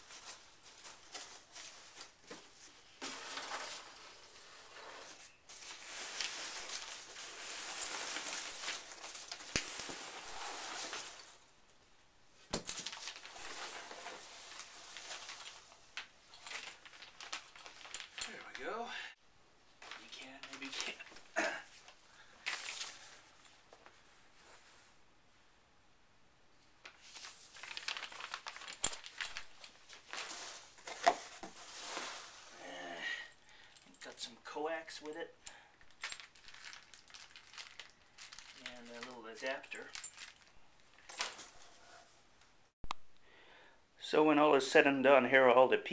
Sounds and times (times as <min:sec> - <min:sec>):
Speech: 0:18.3 - 0:19.2, 0:20.0 - 0:21.1, 0:34.0 - 0:35.4, 0:38.6 - 0:39.9, 0:44.0 - 0:45.9.